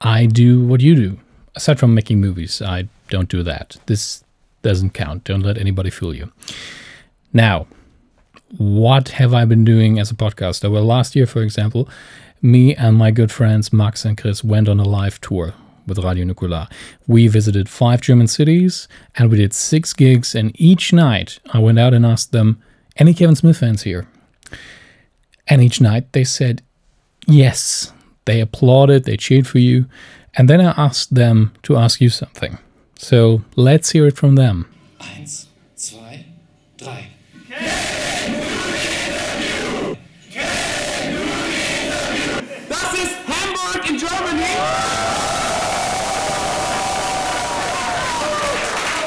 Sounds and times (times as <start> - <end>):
Speech: 0.0 - 6.3, 7.3 - 7.7, 8.5 - 24.1, 25.4 - 36.2, 42.7 - 44.7.